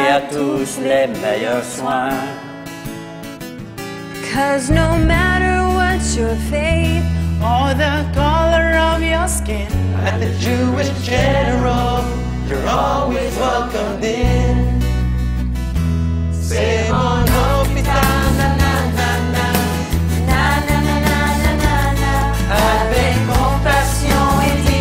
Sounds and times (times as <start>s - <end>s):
Music: 0.0s - 24.8s.